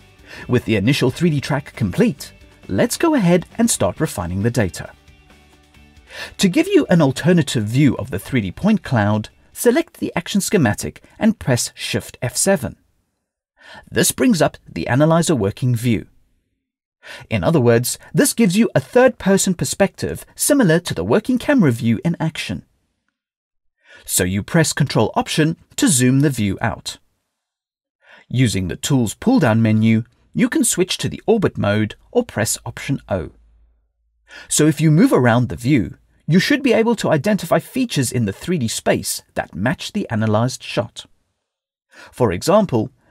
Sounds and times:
Speech: 0.4s - 5.0s, 6.3s - 12.8s, 13.8s - 16.1s, 17.2s - 22.7s, 24.0s - 27.0s, 28.2s - 33.4s, 34.5s - 41.1s, 42.1s - 42.9s.

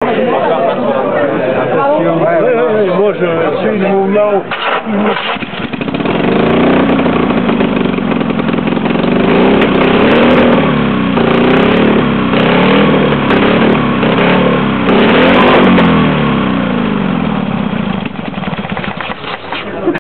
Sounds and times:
Heavy engine (low frequency): 4.5s - 20.0s
Accelerating, revving, vroom: 9.1s - 16.4s.

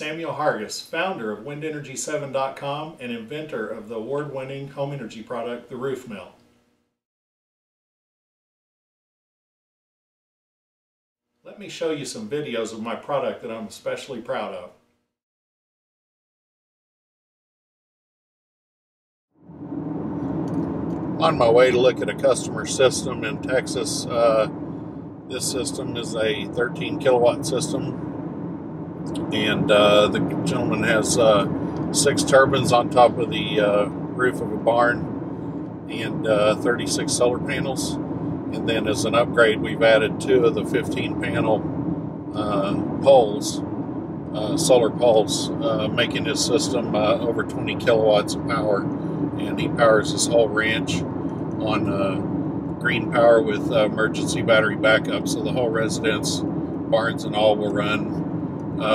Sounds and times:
Speech: 0.0s - 6.4s, 11.5s - 14.8s, 21.2s - 24.5s, 25.3s - 28.0s, 29.2s - 35.0s, 35.9s - 38.0s, 38.6s - 41.6s, 42.4s - 43.6s, 44.4s - 48.8s, 49.4s - 51.0s, 51.6s - 52.2s, 52.8s - 58.2s.

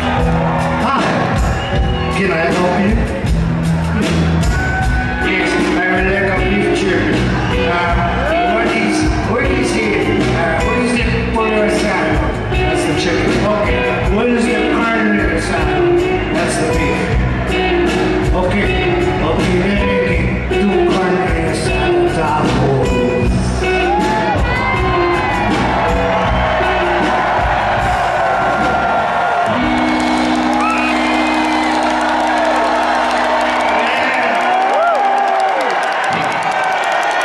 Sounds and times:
Inside, large room or hall: 0.0s - 37.2s
Music: 0.0s - 37.2s
Speech: 2.1s - 3.1s, 5.2s - 17.0s, 18.3s - 23.0s.

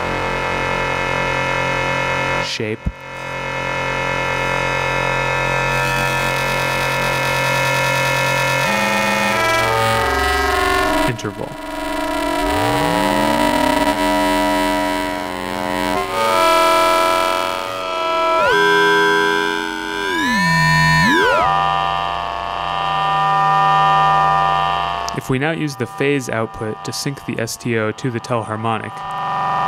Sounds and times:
Speech: 2.4s - 3.0s, 11.1s - 11.6s, 25.1s - 29.0s
Synthesizer: 6.3s - 22.9s.

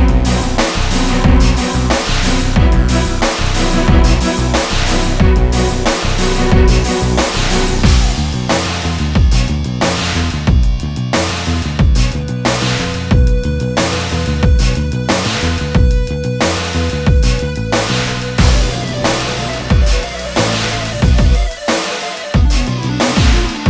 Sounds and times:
Music: 0.0s - 23.7s.

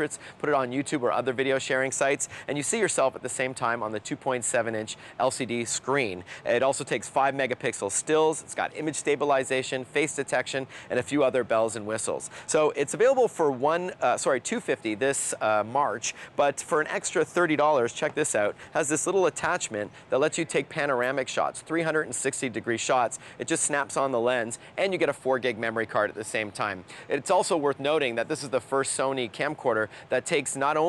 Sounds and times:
Speech: 0.0s - 30.8s.

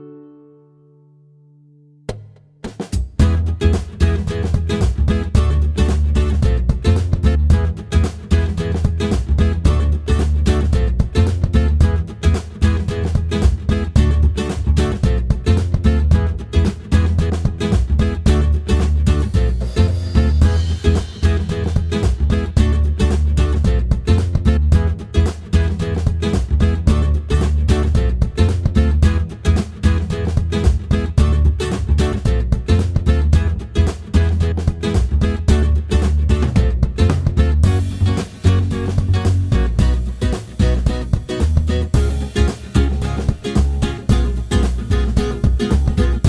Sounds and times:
Music: 0.0s - 46.2s.

